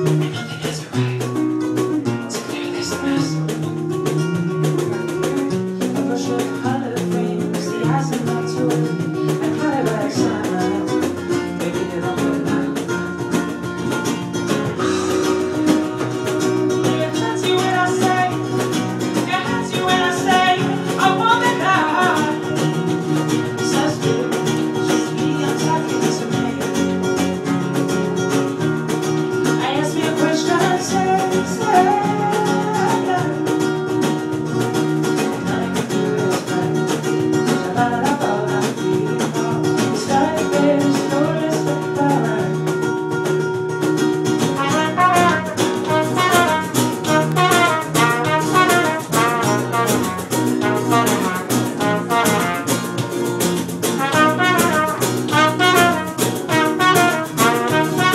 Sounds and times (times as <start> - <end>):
Music: 0.0 - 58.1.